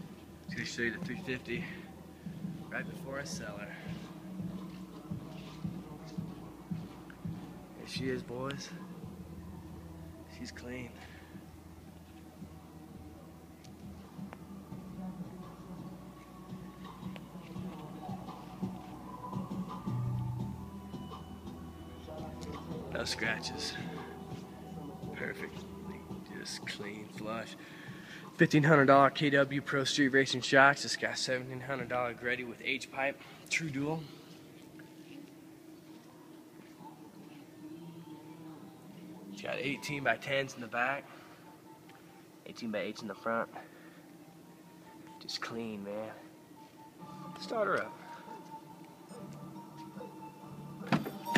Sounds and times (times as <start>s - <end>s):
Speech: 0.5s - 1.9s, 2.7s - 3.9s, 7.8s - 8.8s, 22.6s - 24.0s, 28.4s - 34.1s, 39.4s - 41.1s, 42.5s - 43.6s, 45.2s - 46.2s.